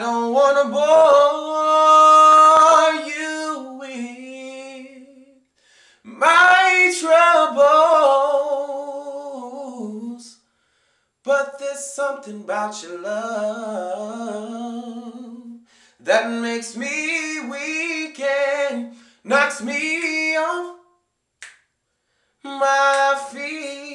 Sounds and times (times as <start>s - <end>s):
Male singing: 0.0s - 5.4s, 6.0s - 10.4s, 11.3s - 20.9s, 22.4s - 23.9s.